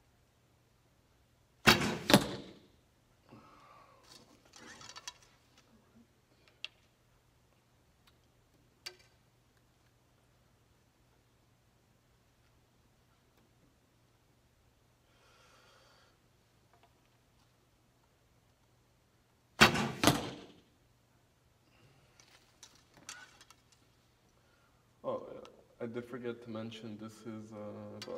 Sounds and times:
Arrow: 1.6s - 2.7s, 19.6s - 20.7s.

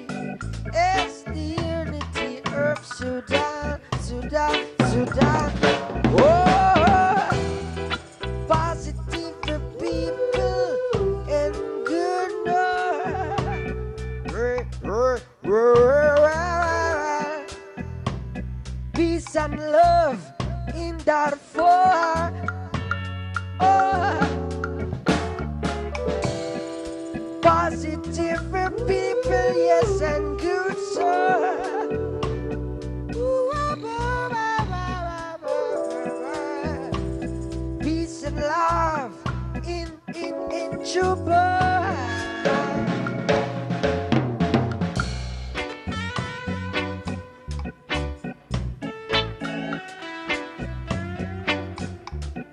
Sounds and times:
Music: 0.0s - 52.5s.

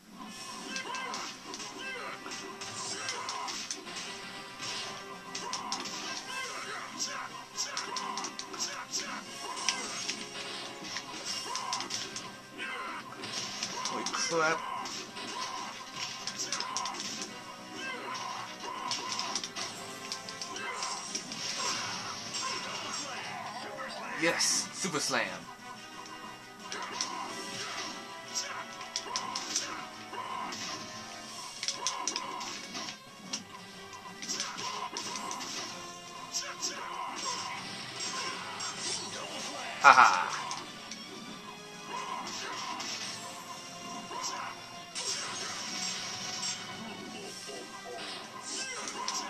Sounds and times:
Music: 0.0s - 49.2s
Speech: 13.9s - 14.6s, 23.8s - 25.4s.

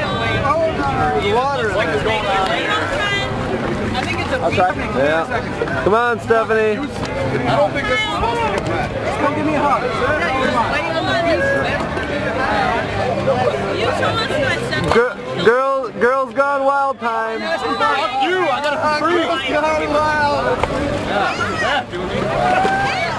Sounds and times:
Music: 5.3s - 23.1s.

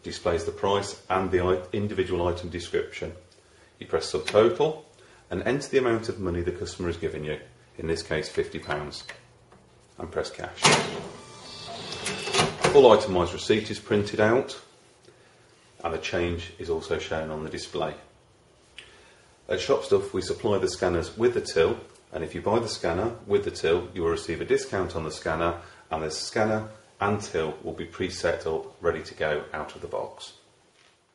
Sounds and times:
Speech: 0.0s - 9.2s, 10.0s - 10.8s, 12.6s - 14.7s, 15.8s - 18.1s, 19.5s - 30.5s
Cash register: 10.6s - 12.8s.

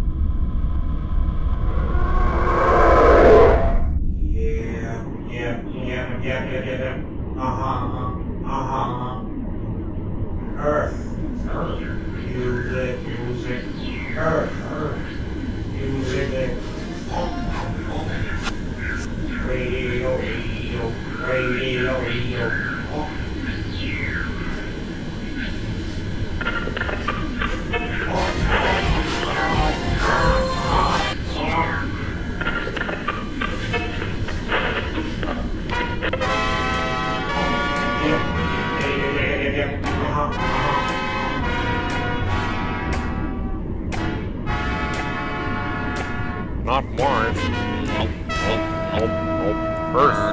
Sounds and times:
Music: 13.6s - 50.3s.

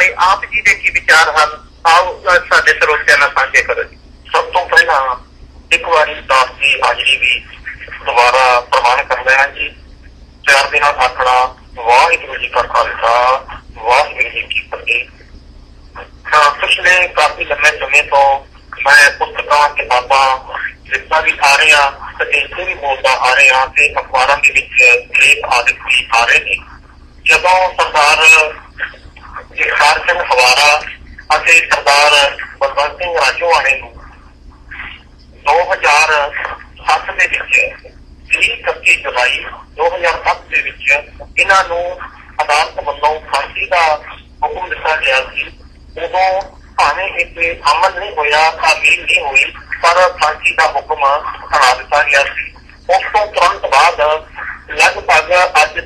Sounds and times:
Speech: 0.0s - 9.8s, 10.4s - 15.2s, 16.0s - 55.8s.

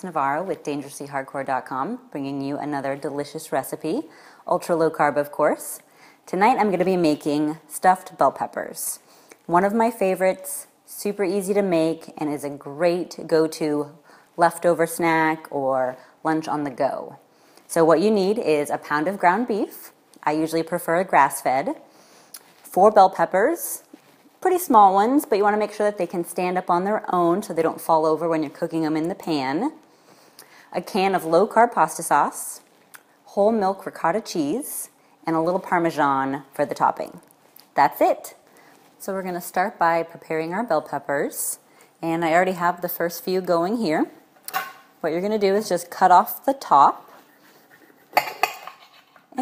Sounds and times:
Speech: 0.0s - 21.8s, 22.6s - 29.8s, 30.7s - 32.6s, 33.3s - 37.2s, 37.8s - 38.4s, 39.0s - 44.2s, 45.0s - 47.1s.

